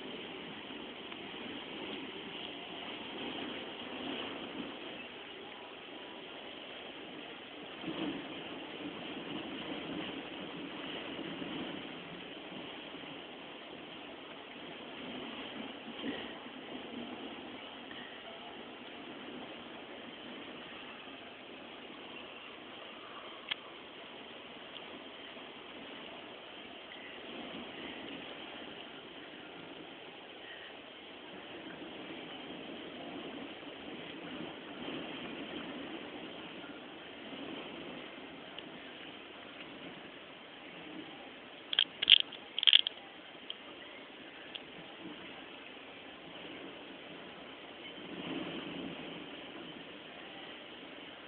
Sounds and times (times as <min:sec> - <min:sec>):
Rustling leaves: 0:00.0 - 0:51.2.